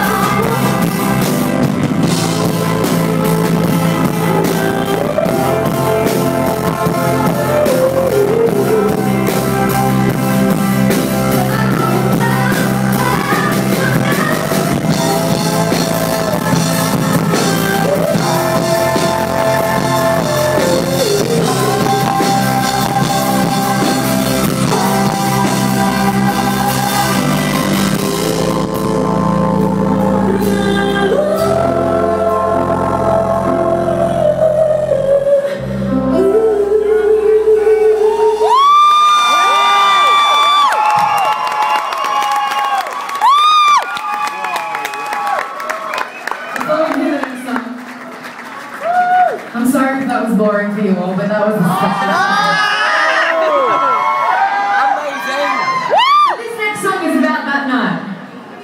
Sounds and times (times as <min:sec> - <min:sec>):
Inside, large room or hall: 0:00.0 - 0:58.6
Whoop: 0:38.1 - 0:46.6, 0:48.8 - 0:49.5, 0:51.9 - 0:56.4.